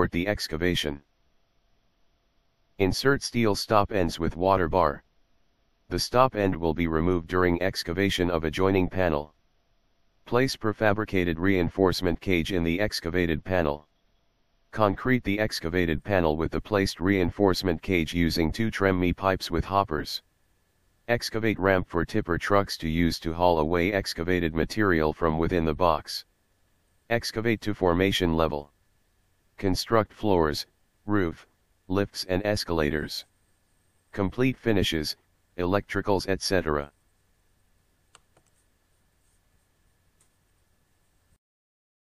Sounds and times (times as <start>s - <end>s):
Speech: 0.0s - 1.0s, 2.8s - 5.1s, 5.9s - 9.4s, 10.3s - 13.9s, 14.8s - 20.2s, 21.1s - 26.3s, 27.1s - 28.7s, 29.6s - 33.3s, 34.2s - 36.9s.